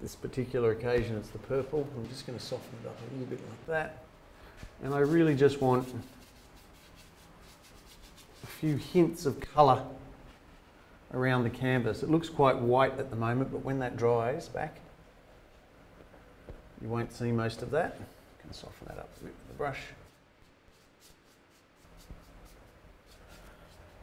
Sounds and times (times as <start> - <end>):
Speech: 0.0 - 4.1, 4.8 - 6.1, 8.5 - 10.0, 11.1 - 14.9, 16.8 - 20.1.